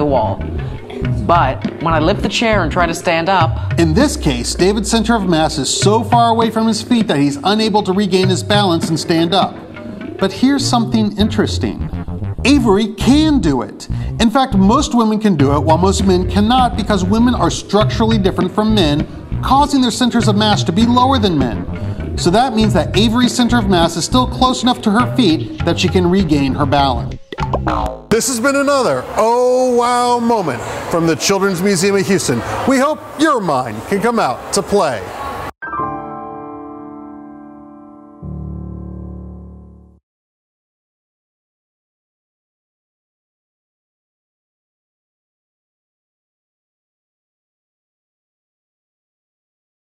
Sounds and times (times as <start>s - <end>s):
Speech: 0.0s - 0.4s, 1.2s - 9.6s, 10.2s - 11.8s, 12.5s - 27.1s, 28.2s - 35.1s
Music: 0.0s - 29.0s, 35.6s - 40.0s
Inside, public space: 28.2s - 35.8s.